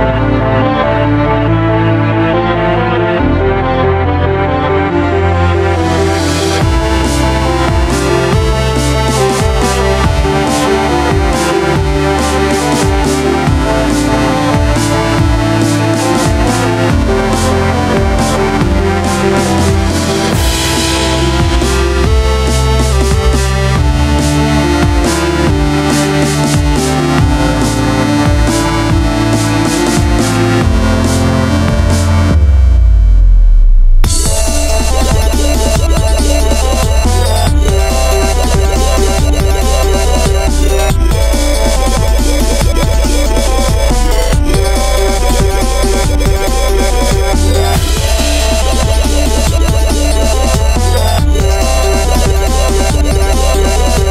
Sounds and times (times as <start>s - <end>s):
Dubstep: 4.8s - 54.1s.